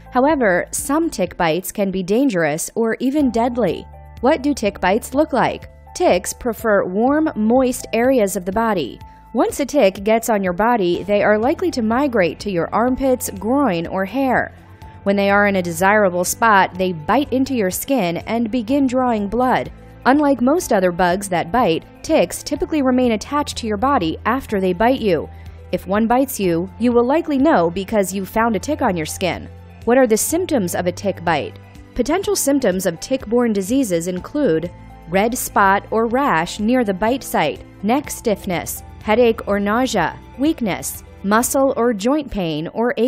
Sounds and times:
Music: 0.0 - 43.0
Speech: 0.2 - 14.5, 15.1 - 43.0.

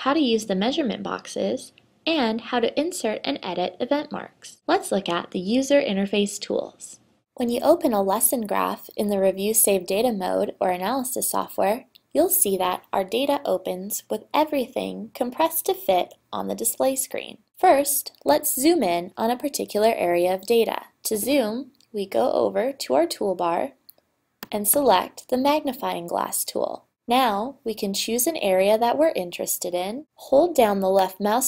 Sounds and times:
Speech: 0.0 - 23.8, 24.5 - 31.4.

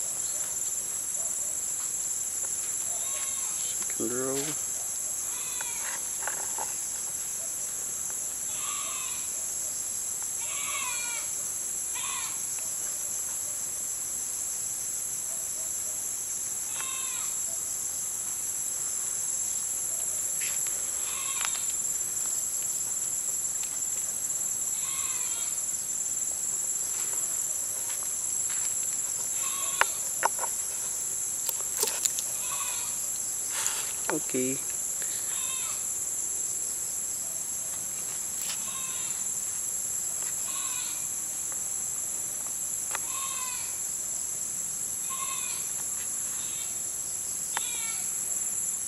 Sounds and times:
Insect: 0.0 - 48.8
Outside, rural or natural: 0.0 - 48.8
Goat: 2.8 - 4.6, 5.2 - 6.8, 8.5 - 9.4, 24.7 - 25.6, 29.0 - 30.6, 31.8 - 34.6, 38.5 - 39.2, 45.0 - 46.8
Speech: 3.8 - 4.6, 34.1 - 34.7.

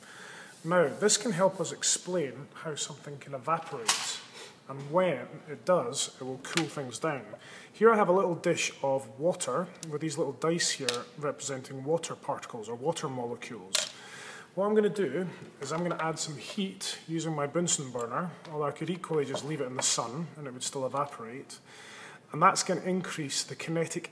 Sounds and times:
Speech: 0.6 - 13.9, 14.6 - 21.6, 22.3 - 24.1.

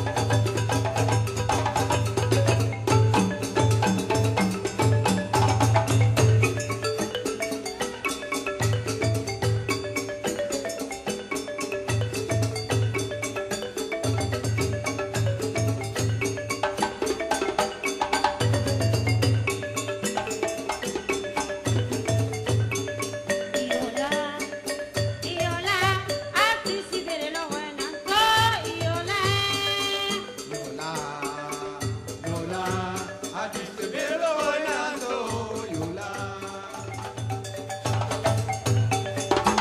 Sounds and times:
Glockenspiel: 0.0 - 39.6
Marimba, xylophone: 0.0 - 39.6.

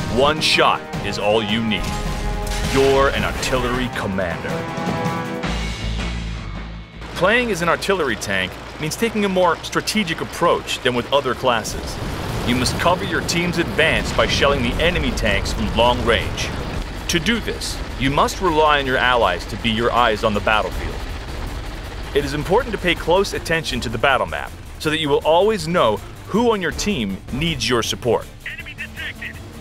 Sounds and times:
Music: 0.0 - 10.5, 12.2 - 29.6
Speech: 0.1 - 1.9, 2.7 - 4.6, 7.2 - 21.0, 22.2 - 29.4
Artillery fire: 1.8 - 3.9, 11.7 - 24.8.

